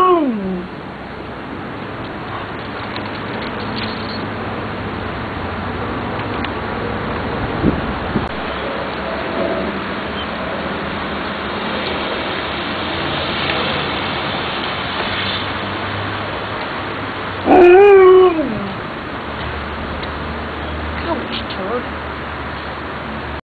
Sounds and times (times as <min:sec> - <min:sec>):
Speech: 0:21.0 - 0:21.9.